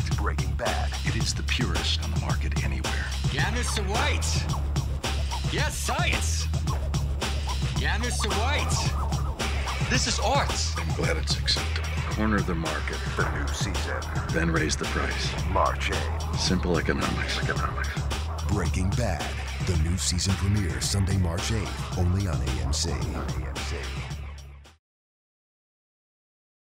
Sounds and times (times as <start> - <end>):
Speech: 0.0 - 4.4, 5.5 - 6.5, 7.8 - 8.9, 9.9 - 24.0
Music: 0.0 - 24.8.